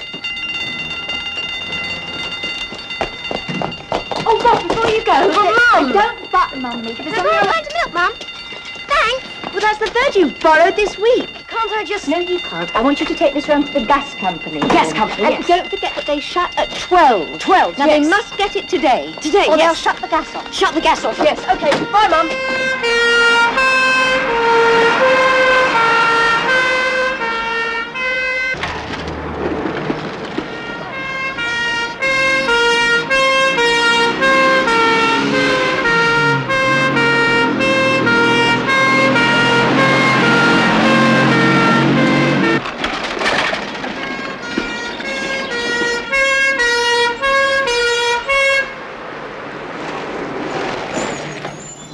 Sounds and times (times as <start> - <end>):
Outside, urban or manmade: 0.0 - 51.9.